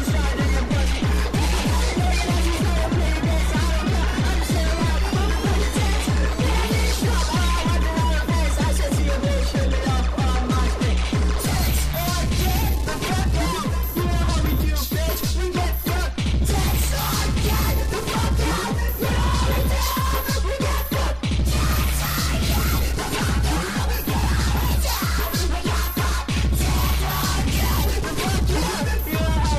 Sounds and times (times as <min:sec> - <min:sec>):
Music: 0:00.0 - 0:29.5.